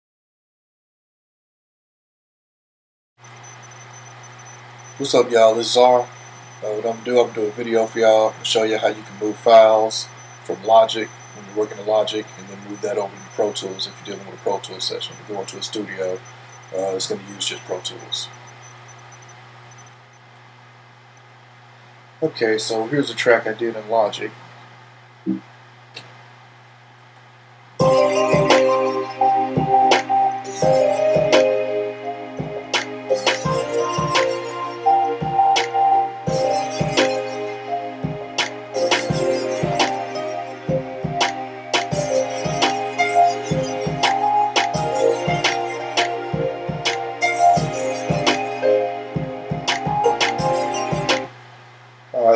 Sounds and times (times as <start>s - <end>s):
Music: 27.8s - 51.3s.